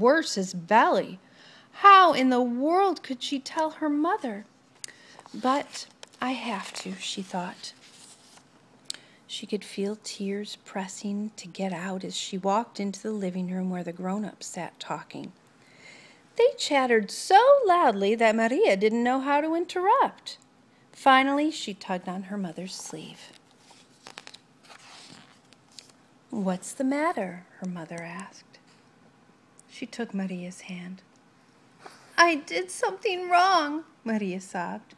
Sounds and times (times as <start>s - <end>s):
Speech: 0.0s - 1.2s, 1.8s - 4.5s, 5.3s - 7.8s, 9.3s - 15.4s, 16.4s - 20.4s, 21.0s - 23.4s, 26.3s - 28.6s, 29.7s - 31.1s, 32.2s - 34.9s
Inside, small room: 0.0s - 34.9s.